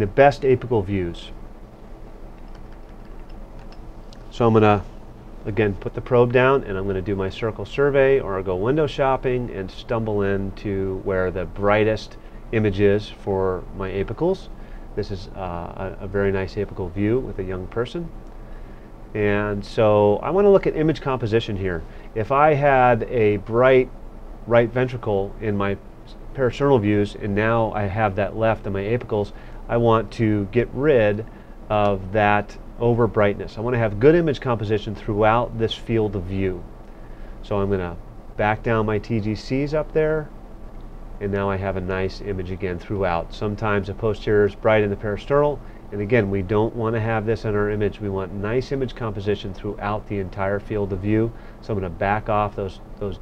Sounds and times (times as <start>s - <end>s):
Speech: 0.0s - 1.4s, 4.3s - 18.2s, 19.1s - 36.7s, 37.4s - 40.3s, 41.2s - 53.2s.